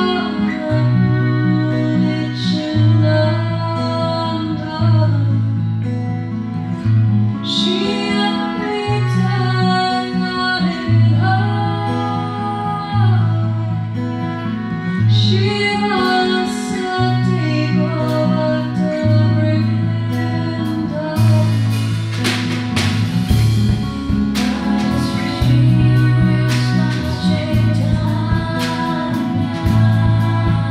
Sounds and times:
Music: 0:00.0 - 0:30.7.

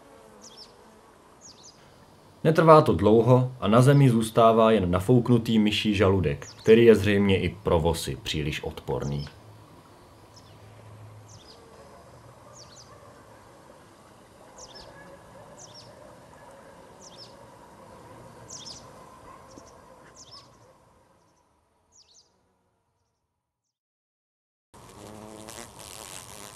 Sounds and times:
Fly, housefly: 0:00.0 - 0:02.1, 0:24.8 - 0:26.5
Bee, wasp, etc.: 0:00.0 - 0:19.1, 0:24.8 - 0:26.5.

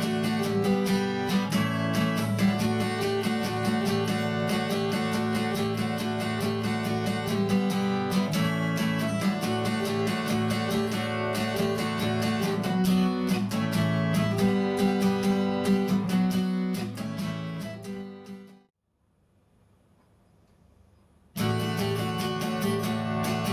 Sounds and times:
Acoustic guitar: 0:00.0 - 0:18.7, 0:21.3 - 0:23.5.

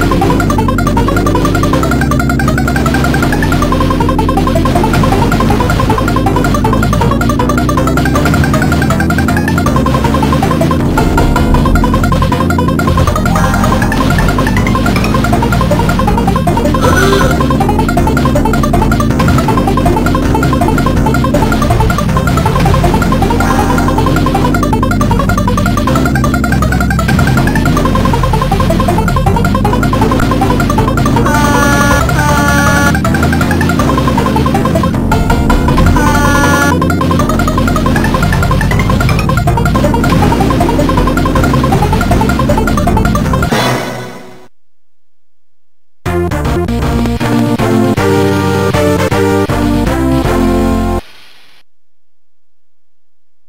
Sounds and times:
Music: 0:00.0 - 0:44.5, 0:46.1 - 0:51.0.

